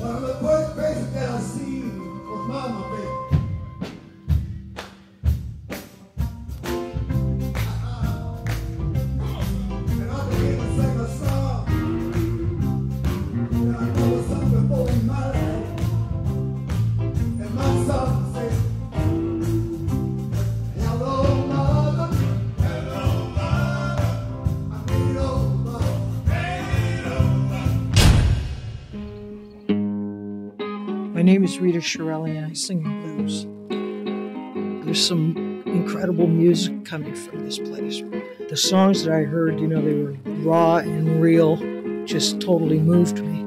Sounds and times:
Music: 0.0 - 43.4.

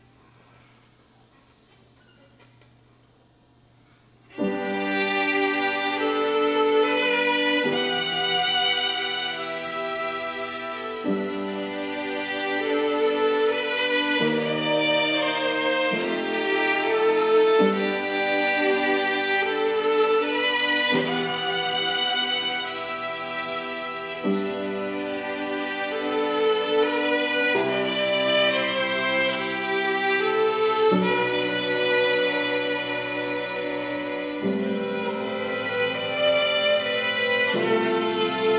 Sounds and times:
Violin, fiddle: 4.3 - 38.5.

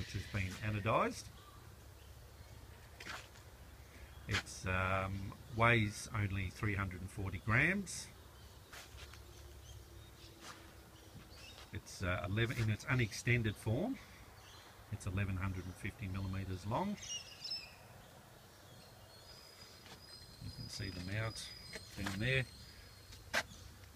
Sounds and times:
Speech: 0.0 - 1.3, 4.3 - 8.2, 11.8 - 14.0, 14.9 - 17.1, 20.4 - 22.5.

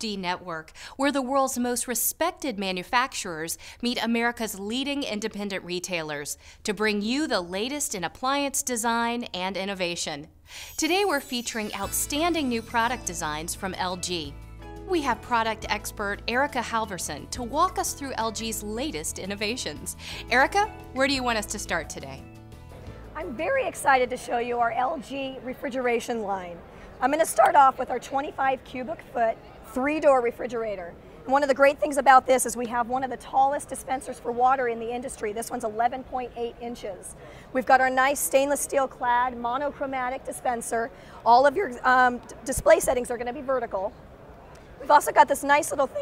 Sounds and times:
Speech: 0.0 - 14.3, 14.9 - 22.2, 23.2 - 43.9, 44.8 - 46.0
Music: 10.9 - 24.2.

